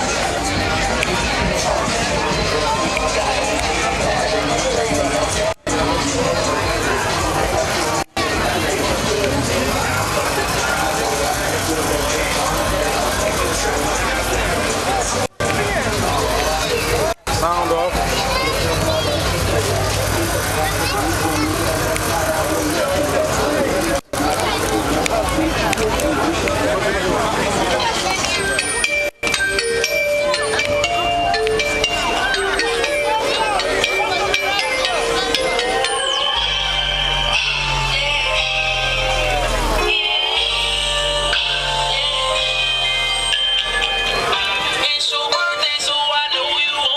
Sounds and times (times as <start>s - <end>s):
Speech: 0.0s - 46.9s.